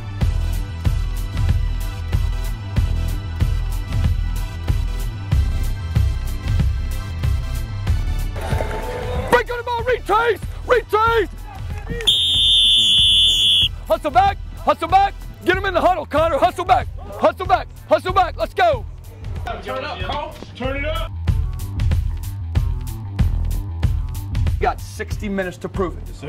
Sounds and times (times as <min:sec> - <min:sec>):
Music: 0:00.0 - 0:26.2
Outside, urban or manmade: 0:00.0 - 0:26.2.